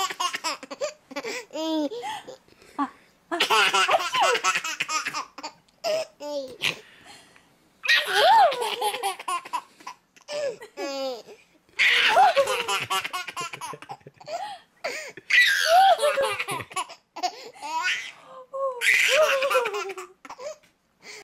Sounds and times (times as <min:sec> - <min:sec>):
Belly laugh: 0:11.8 - 0:17.0, 0:19.0 - 0:20.1.